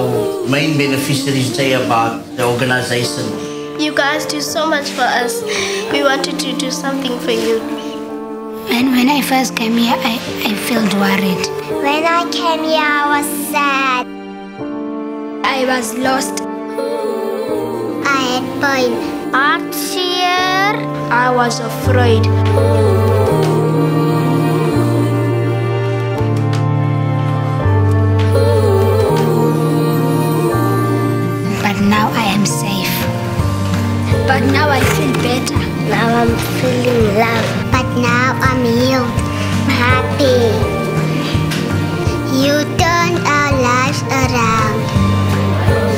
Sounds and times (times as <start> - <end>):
Music: 0.0 - 45.9.